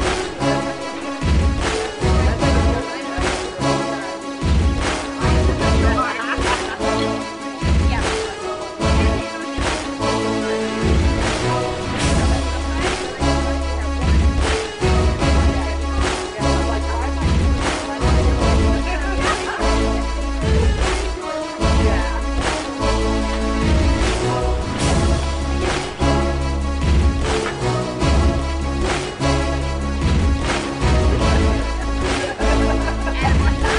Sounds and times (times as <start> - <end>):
Music: 0.0 - 33.7
Speech: 2.0 - 4.2, 5.2 - 7.2, 7.8 - 9.8, 12.2 - 14.2, 15.2 - 19.7.